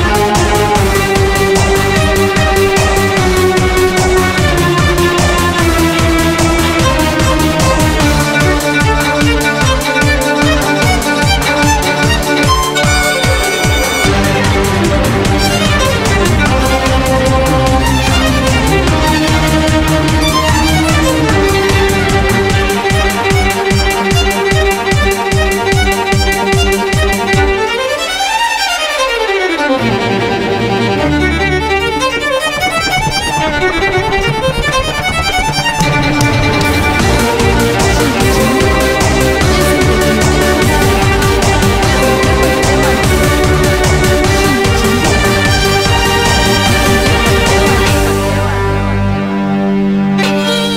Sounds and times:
Violin, fiddle: 0.0s - 50.7s.

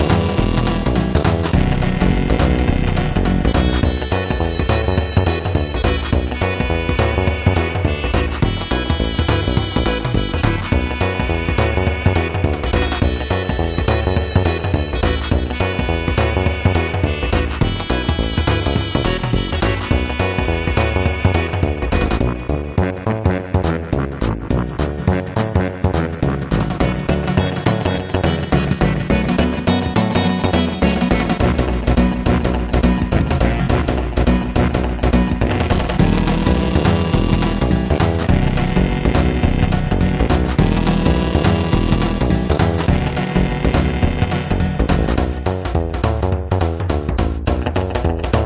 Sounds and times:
Video game music: 0.0s - 48.4s.

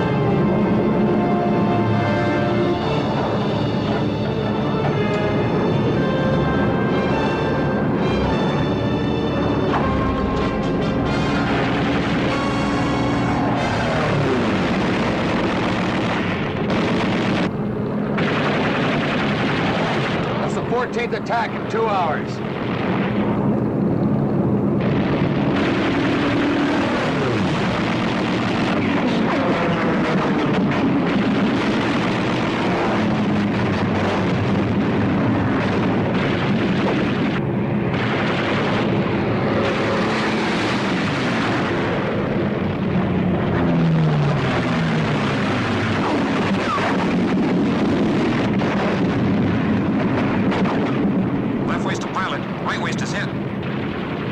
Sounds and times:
Speech: 20.4s - 22.4s, 51.7s - 53.4s
Wind noise (microphone): 22.3s - 51.8s.

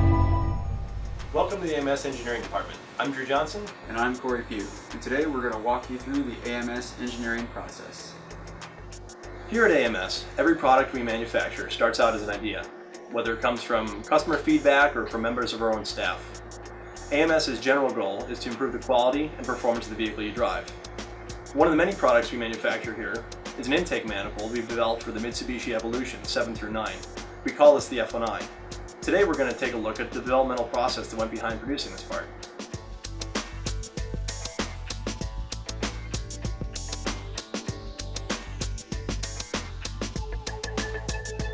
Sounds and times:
Music: 0.0s - 41.5s
Speech: 1.4s - 8.2s, 9.5s - 16.3s, 17.1s - 20.7s, 21.6s - 32.3s.

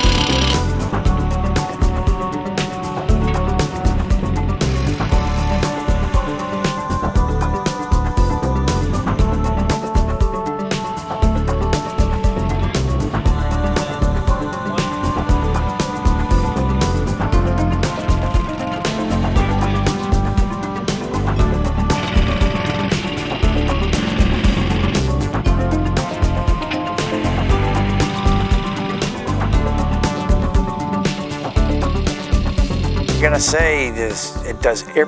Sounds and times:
Music: 0.0s - 35.0s.

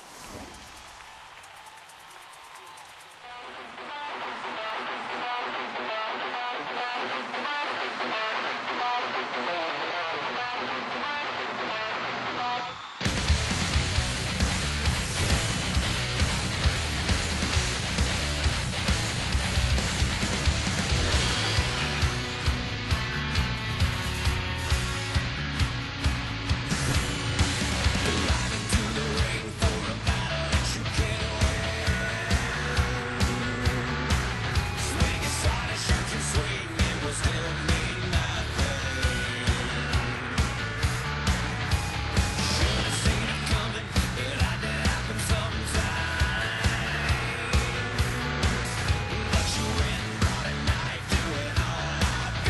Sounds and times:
Guitar: 2.3s - 52.5s.

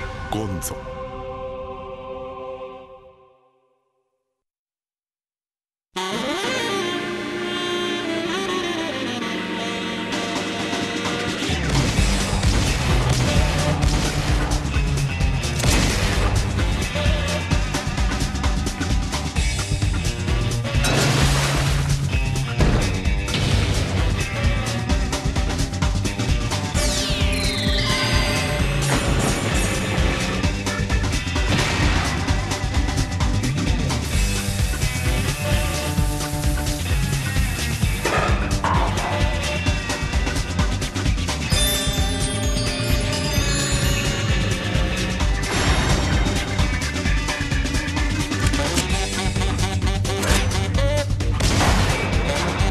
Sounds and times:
Music: 0.0s - 4.4s, 5.9s - 52.7s.

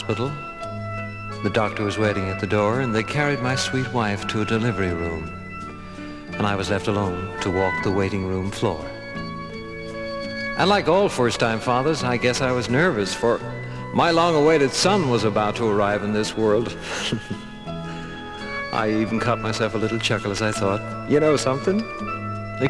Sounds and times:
Speech: 0.0s - 0.4s, 1.4s - 5.3s, 6.4s - 8.9s, 10.6s - 17.4s, 18.8s - 21.9s
Music: 0.0s - 22.7s.

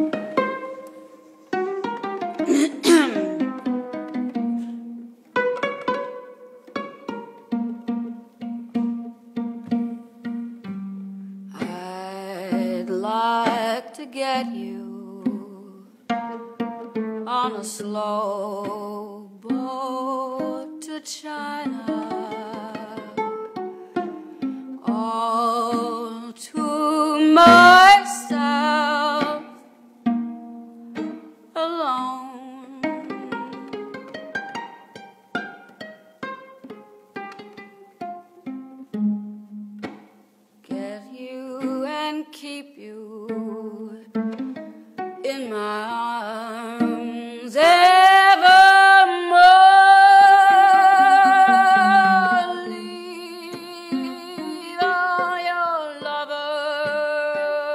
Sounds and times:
Music: 0.0s - 21.0s, 21.6s - 31.6s, 32.4s - 42.3s, 43.0s - 47.5s, 51.8s - 57.7s.

